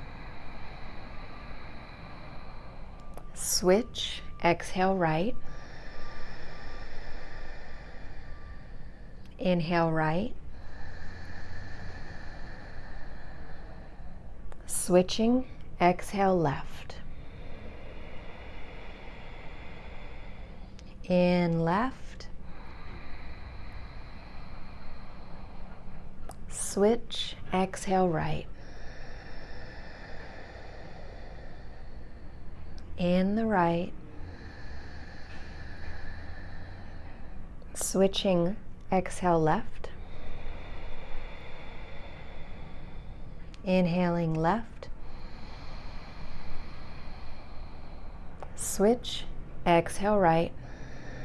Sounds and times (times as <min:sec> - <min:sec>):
Breathing: 0:00.0 - 0:21.1, 0:21.7 - 0:51.2.